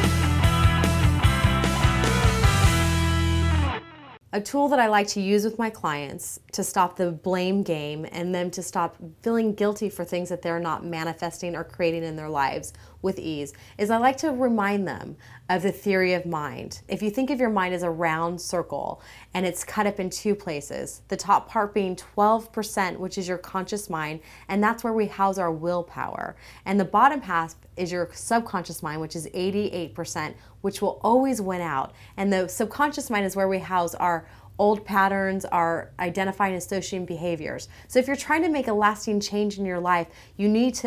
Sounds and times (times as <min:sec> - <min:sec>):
Speech: 0:04.3 - 0:40.8.